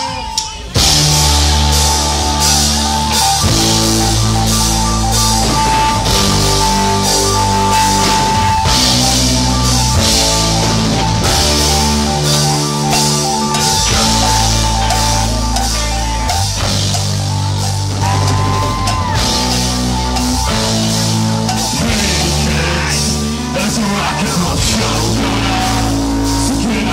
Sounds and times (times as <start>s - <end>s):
Rock and roll: 0.0s - 26.9s.